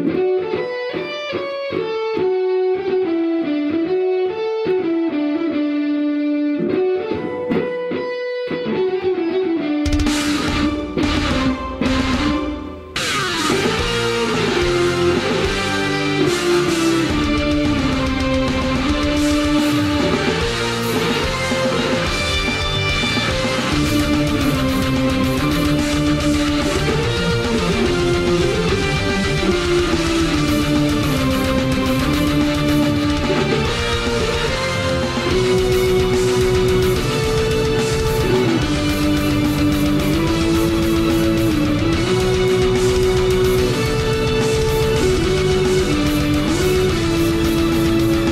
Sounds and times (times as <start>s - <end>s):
Bass guitar: 9.8s - 48.3s.